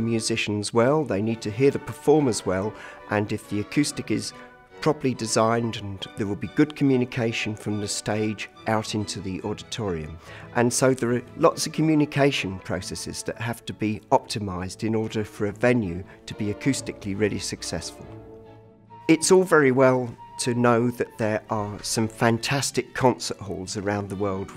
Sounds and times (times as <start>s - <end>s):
Speech: 0.0s - 18.1s, 19.1s - 24.5s
Music: 0.0s - 24.5s.